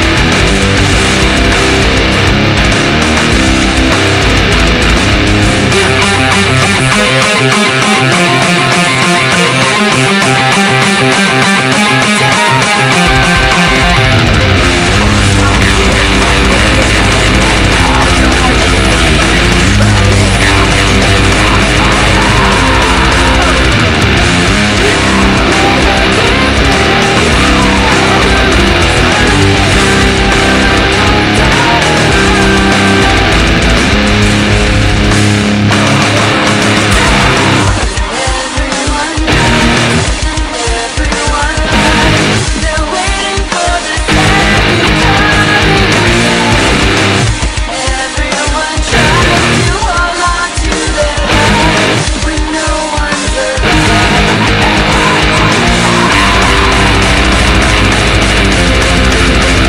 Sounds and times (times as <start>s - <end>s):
Strum: 0.0s - 40.5s, 41.6s - 42.6s, 44.1s - 47.8s, 48.9s - 49.9s, 51.3s - 52.2s, 53.6s - 59.6s
Electric guitar: 0.0s - 59.6s.